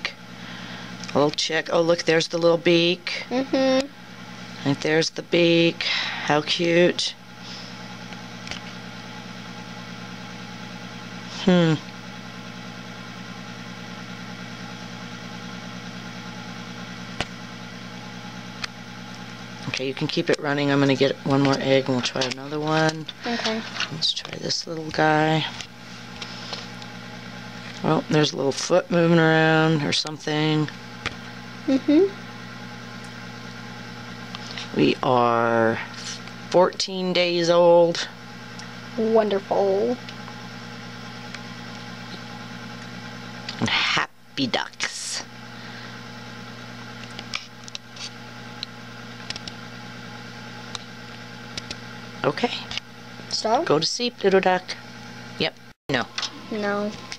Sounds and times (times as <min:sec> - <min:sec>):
Speech: 0:01.1 - 0:03.9, 0:04.6 - 0:07.2, 0:19.6 - 0:25.6, 0:27.8 - 0:30.7, 0:31.7 - 0:32.1, 0:34.7 - 0:38.1, 0:39.0 - 0:40.0, 0:43.6 - 0:45.3, 0:52.2 - 0:52.7, 0:53.3 - 0:54.8.